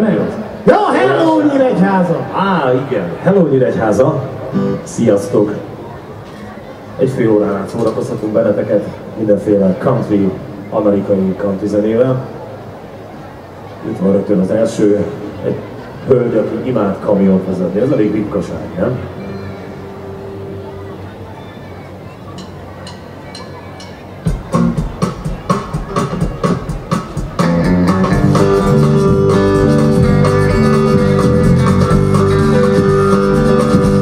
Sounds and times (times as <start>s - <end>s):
Electronic music: 22.4s - 34.0s.